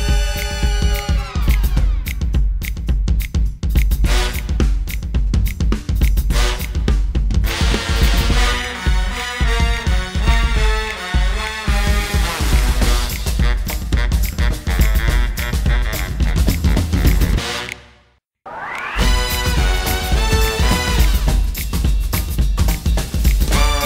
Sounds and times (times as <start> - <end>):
Music: 0.0 - 18.2, 18.8 - 23.8.